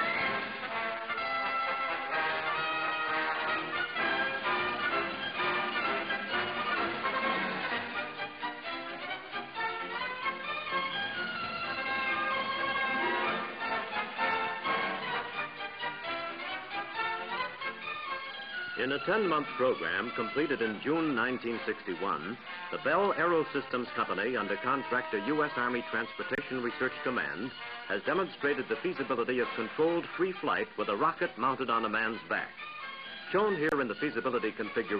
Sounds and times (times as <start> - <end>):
Music: 0.0 - 34.9
Speech: 18.8 - 32.6, 33.3 - 34.9.